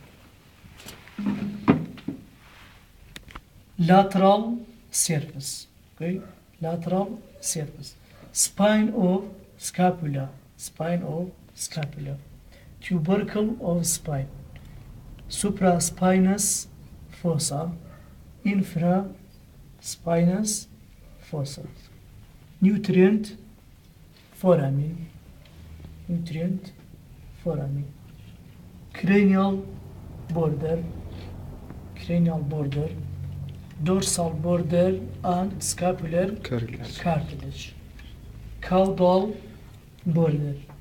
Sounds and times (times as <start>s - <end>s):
Speech: 3.8s - 14.4s, 15.3s - 22.0s, 22.6s - 23.5s, 24.4s - 25.2s, 26.1s - 26.8s, 27.4s - 28.0s, 28.9s - 31.0s, 32.0s - 33.1s, 33.8s - 37.8s, 38.6s - 40.8s.